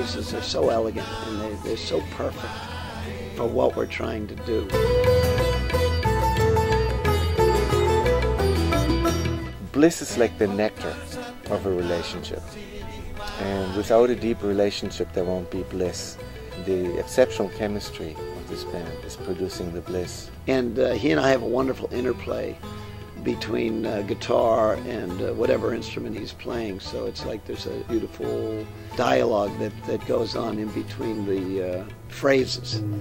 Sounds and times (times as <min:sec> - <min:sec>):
Speech: 0:00.0 - 0:02.5, 0:03.3 - 0:04.8, 0:09.6 - 0:12.5, 0:13.4 - 0:22.6, 0:23.2 - 0:33.0
Music: 0:00.0 - 0:33.0.